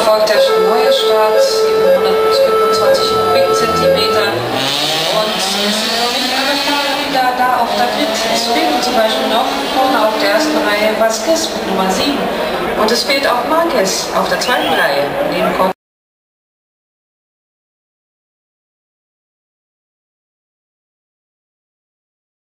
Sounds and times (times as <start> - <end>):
Speech: 0.0 - 4.5, 5.1 - 15.8.